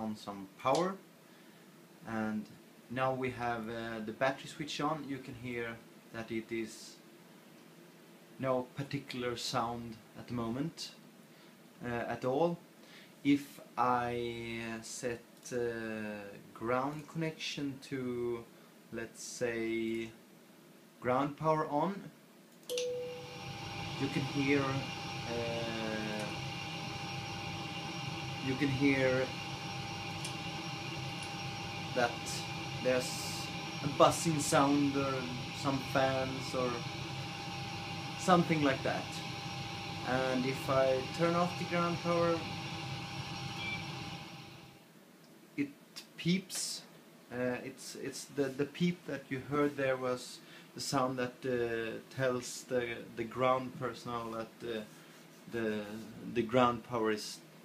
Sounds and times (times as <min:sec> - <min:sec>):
Speech: 0:00.0 - 0:01.0, 0:02.0 - 0:07.0, 0:08.4 - 0:11.0, 0:11.8 - 0:12.6, 0:13.2 - 0:20.2, 0:21.0 - 0:22.2, 0:24.0 - 0:26.4, 0:28.4 - 0:29.3, 0:32.0 - 0:36.8, 0:38.2 - 0:39.2, 0:40.0 - 0:42.5, 0:45.6 - 0:54.9, 0:55.5 - 0:57.5.